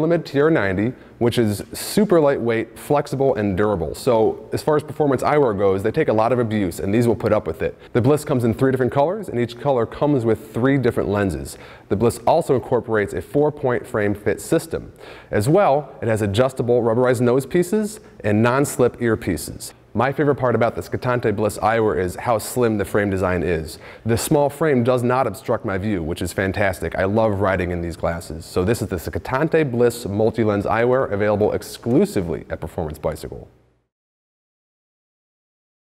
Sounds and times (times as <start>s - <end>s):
Speech: 0.0s - 33.6s.